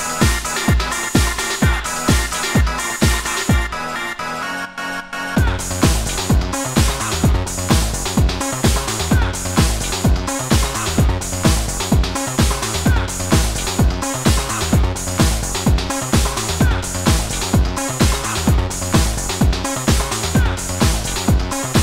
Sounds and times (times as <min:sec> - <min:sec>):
Techno: 0:00.0 - 0:21.8.